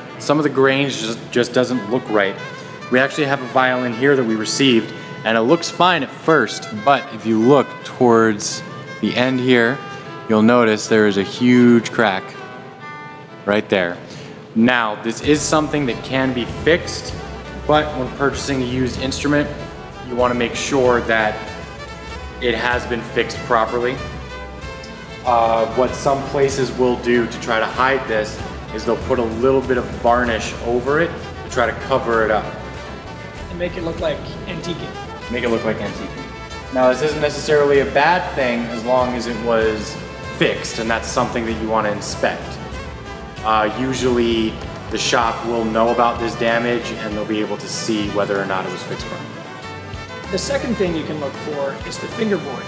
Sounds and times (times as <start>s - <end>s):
Speech: 0.2s - 12.4s, 13.5s - 14.0s, 14.6s - 21.5s, 22.4s - 24.0s, 25.3s - 32.6s, 33.5s - 42.6s, 43.4s - 49.4s, 50.3s - 52.6s.